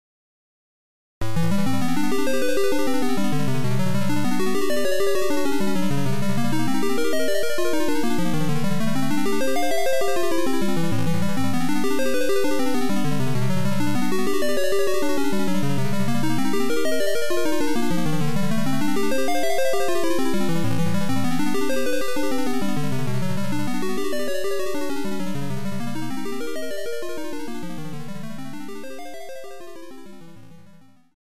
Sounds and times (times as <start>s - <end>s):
Music: 1.2s - 31.2s.